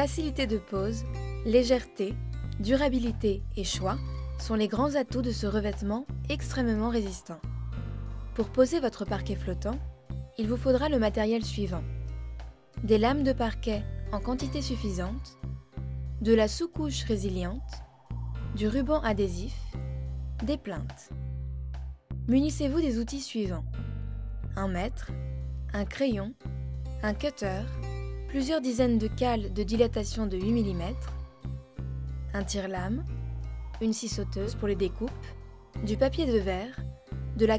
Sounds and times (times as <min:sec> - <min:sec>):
Speech: 0:00.0 - 0:07.4, 0:08.4 - 0:09.8, 0:10.4 - 0:11.8, 0:12.8 - 0:15.3, 0:16.2 - 0:17.8, 0:18.6 - 0:19.7, 0:20.4 - 0:21.1, 0:22.3 - 0:23.6, 0:24.6 - 0:25.1, 0:25.7 - 0:26.4, 0:27.0 - 0:27.7, 0:28.3 - 0:31.1, 0:32.3 - 0:33.1, 0:33.8 - 0:36.8, 0:37.4 - 0:37.5
Music: 0:00.0 - 0:37.5.